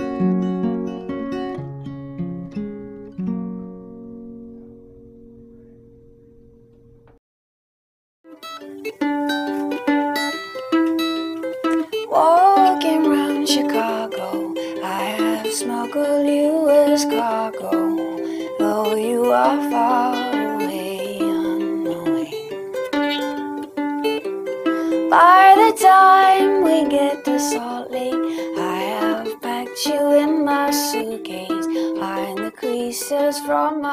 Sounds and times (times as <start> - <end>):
Plucked string instrument: 0.0 - 7.2, 8.3 - 33.9.